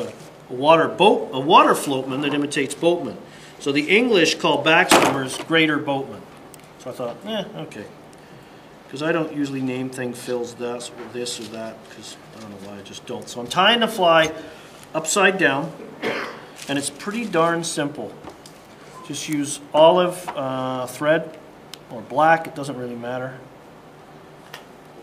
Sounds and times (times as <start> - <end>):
Speech: 0.0 - 6.2, 6.8 - 8.0, 8.9 - 14.4, 15.0 - 15.8, 16.7 - 18.2, 19.0 - 23.5.